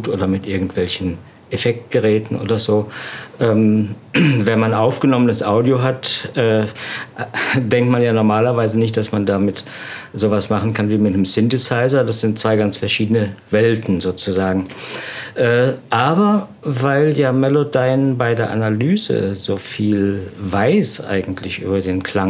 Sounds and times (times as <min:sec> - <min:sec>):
Speech: 0:00.0 - 0:14.7, 0:15.4 - 0:22.3.